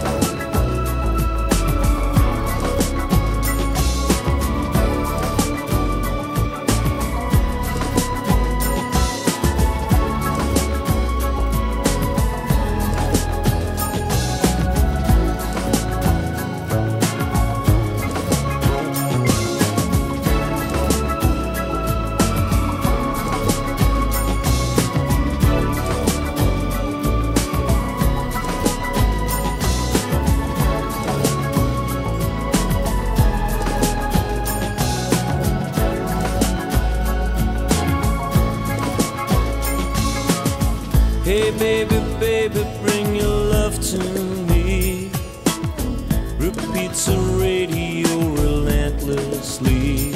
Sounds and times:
Music: 0.0s - 50.1s.

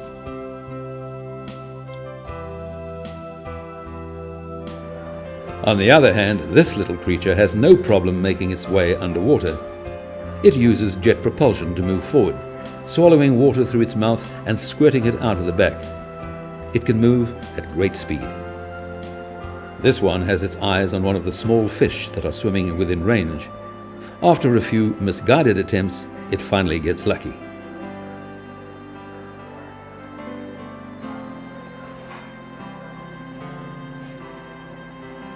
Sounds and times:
Music: 0.0s - 35.3s
Speech: 5.6s - 9.6s, 10.4s - 15.8s, 16.8s - 18.3s, 19.8s - 23.5s, 24.2s - 27.4s.

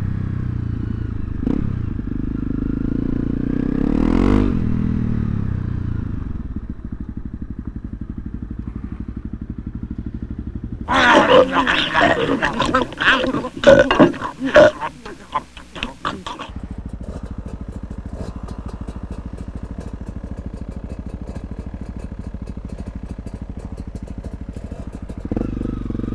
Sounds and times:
Motorcycle: 0.0s - 26.1s
Outside, urban or manmade: 0.0s - 26.1s.

